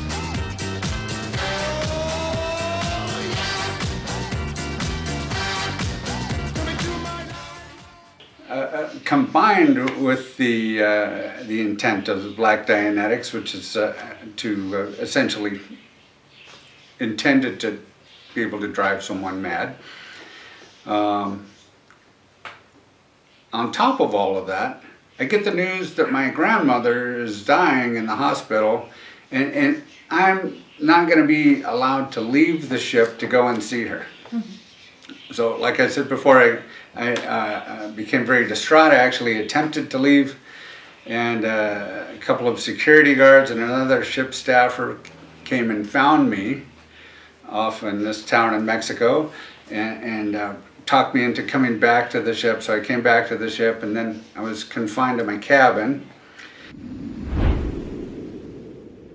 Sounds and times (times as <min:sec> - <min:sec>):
Speech: 0:08.4 - 0:15.8, 0:17.0 - 0:19.8, 0:20.8 - 0:21.6, 0:23.5 - 0:40.4, 0:41.0 - 0:46.7, 0:47.4 - 0:56.1.